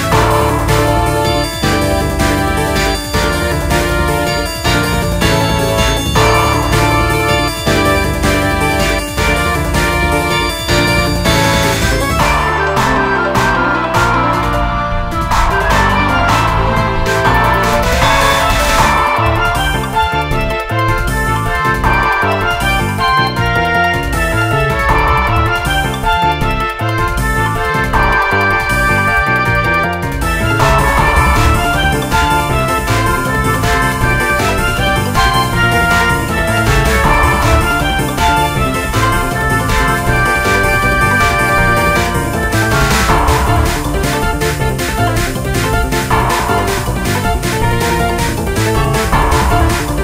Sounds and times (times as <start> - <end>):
Music: 0.0 - 50.0.